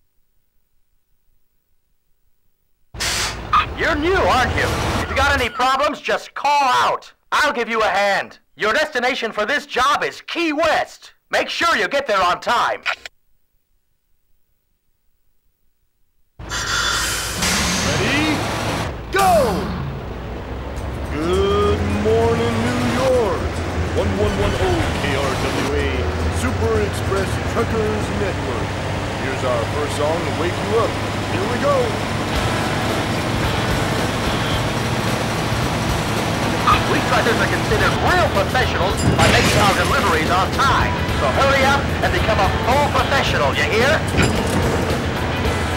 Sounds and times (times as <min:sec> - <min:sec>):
Speech: 0:03.6 - 0:13.1, 0:17.9 - 0:18.5, 0:19.1 - 0:19.8, 0:21.1 - 0:23.4, 0:24.0 - 0:28.6, 0:29.2 - 0:32.0, 0:36.7 - 0:44.1.